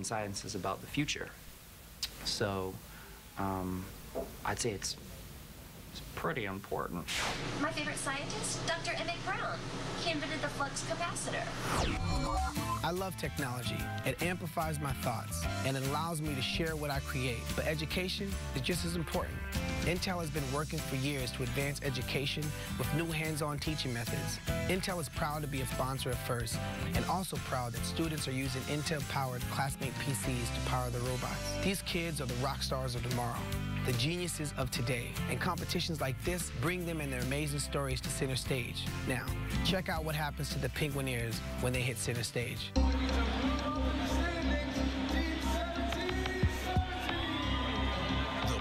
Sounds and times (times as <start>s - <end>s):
Speech: 0.0s - 1.4s, 2.0s - 2.8s, 3.4s - 3.9s, 4.5s - 5.0s, 6.0s - 11.5s, 12.8s - 42.8s
Music: 10.0s - 48.6s.